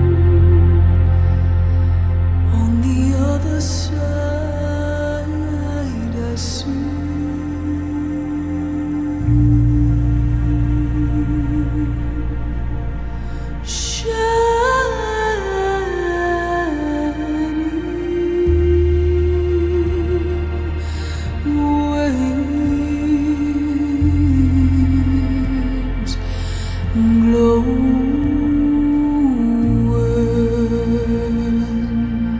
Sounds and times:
Music: 0.0 - 32.3.

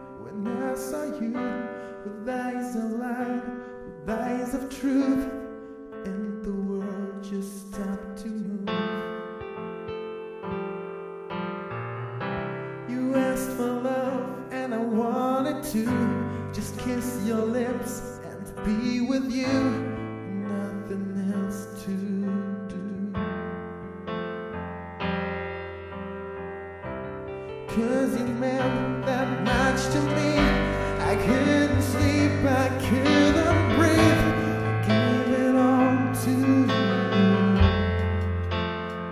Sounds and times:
Music: 0.0 - 39.1.

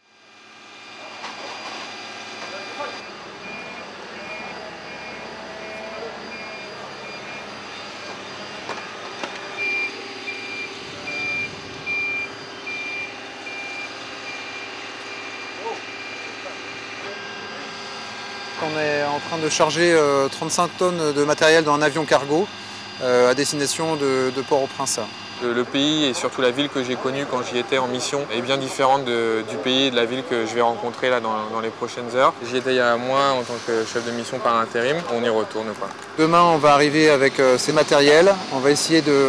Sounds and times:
Speech: 2.4 - 3.0, 18.6 - 39.2.

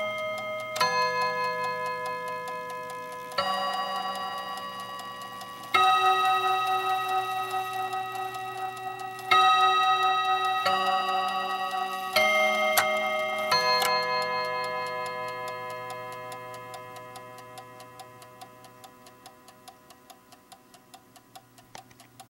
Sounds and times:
Tick-tock: 0.0 - 22.2.

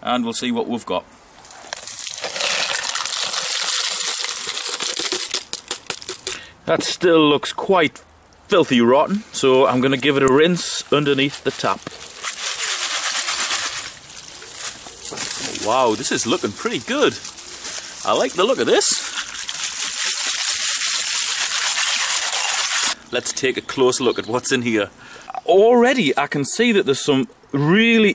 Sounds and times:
Coin (dropping): 3.4 - 5.6.

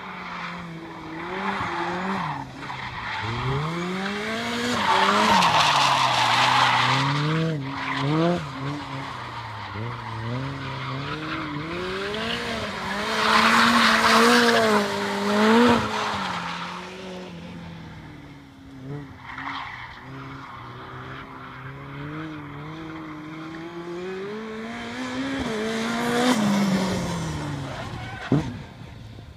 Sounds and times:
Car: 0.0 - 29.3
Accelerating, revving, vroom: 3.2 - 9.1, 9.7 - 17.3, 20.0 - 28.6.

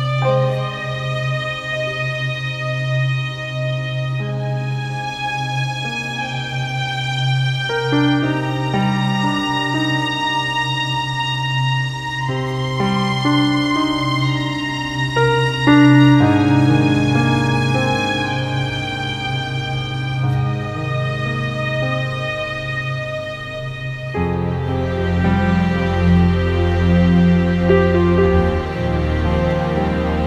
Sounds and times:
Music: 0.0 - 30.2.

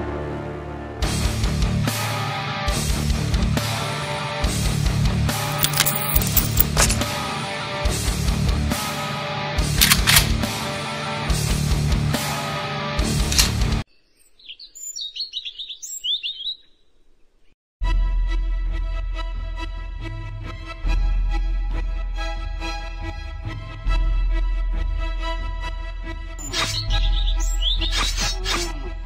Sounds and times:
Music: 0.0 - 13.8, 17.8 - 29.0
Outside, rural or natural: 3.6 - 11.5, 12.2 - 17.6, 26.3 - 29.0.

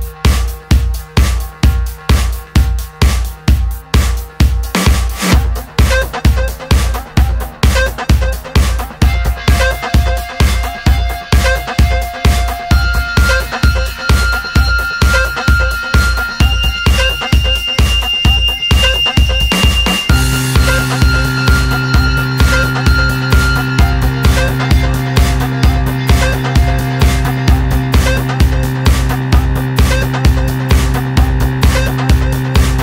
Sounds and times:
Music: 0.0 - 32.8.

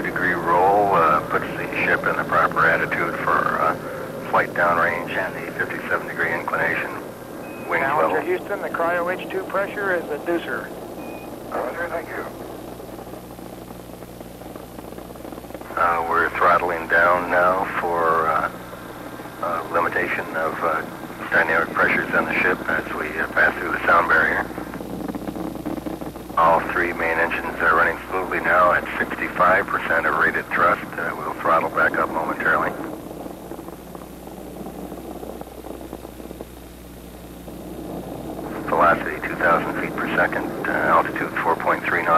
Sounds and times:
Speech: 0.0 - 7.0, 7.6 - 10.7, 11.5 - 12.4, 15.7 - 18.6, 19.4 - 24.6, 26.4 - 32.9, 38.5 - 42.1.

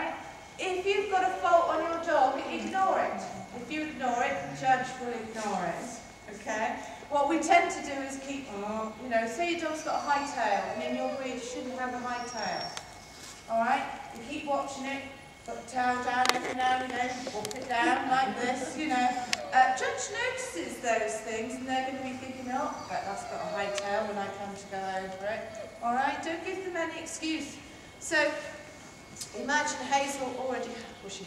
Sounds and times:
Speech: 0.0 - 12.7, 13.5 - 28.6, 29.2 - 31.2.

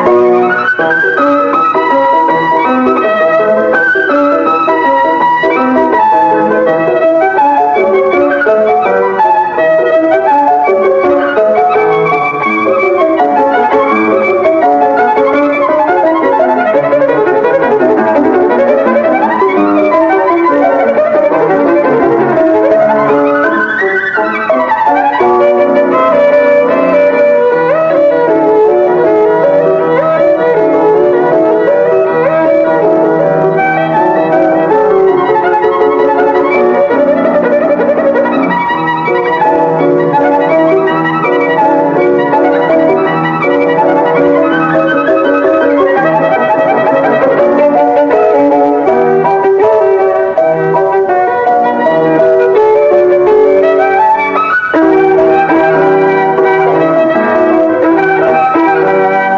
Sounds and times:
Musical instrument: 0.0 - 59.3.

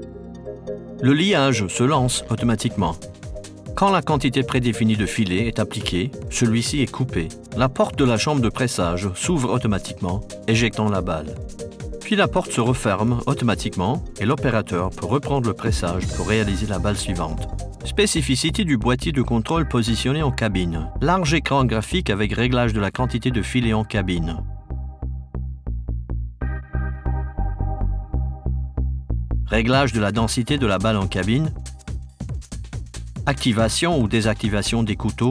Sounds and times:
Music: 0.0 - 35.3
Speech: 1.0 - 3.0, 3.8 - 11.4, 12.0 - 24.4, 29.5 - 31.6, 33.3 - 35.3.

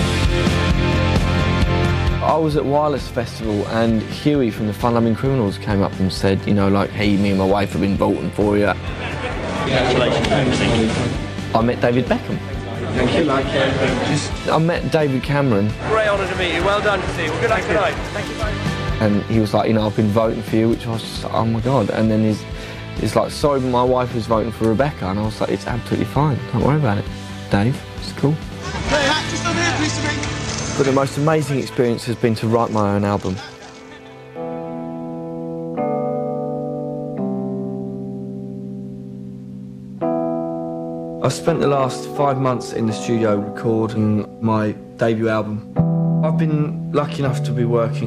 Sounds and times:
Music: 0.0 - 48.0
Speech: 2.2 - 8.8, 9.6 - 22.4, 23.0 - 30.2, 30.8 - 33.5, 41.2 - 45.6, 46.3 - 48.0.

